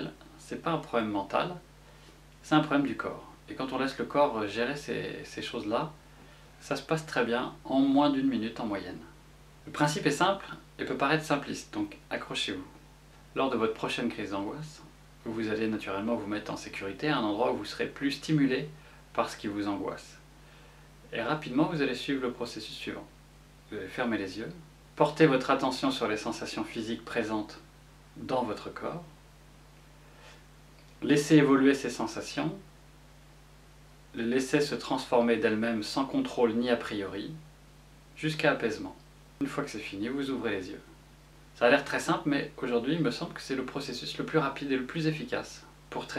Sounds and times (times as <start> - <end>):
Speech: 0.0 - 1.7, 2.4 - 6.0, 6.6 - 20.2, 21.1 - 29.2, 31.0 - 32.7, 34.1 - 37.5, 38.2 - 41.0, 41.6 - 46.1.